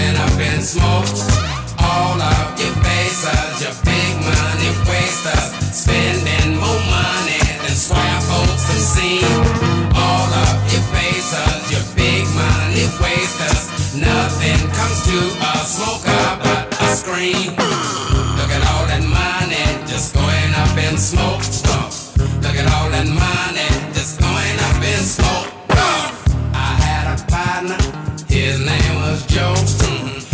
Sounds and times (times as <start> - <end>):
Bass guitar: 0.0 - 30.3.